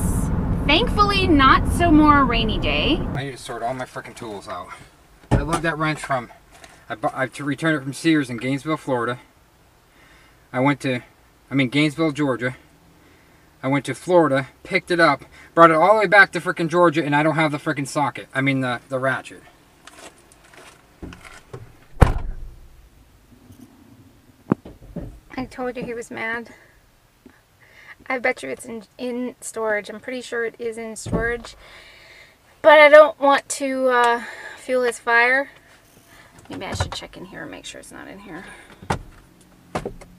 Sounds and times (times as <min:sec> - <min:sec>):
Speech: 0:00.0 - 0:09.2, 0:25.3 - 0:26.6, 0:28.0 - 0:31.6, 0:36.5 - 0:38.6.